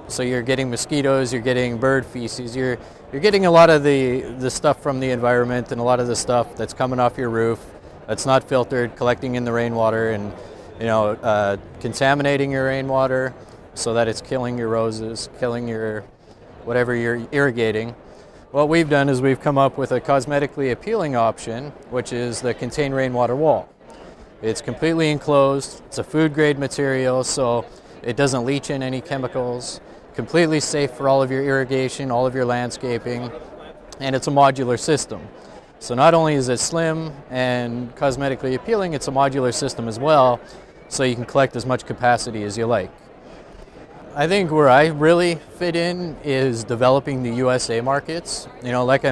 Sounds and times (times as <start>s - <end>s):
Speech: 0.0s - 23.7s, 24.4s - 43.0s, 44.1s - 49.1s.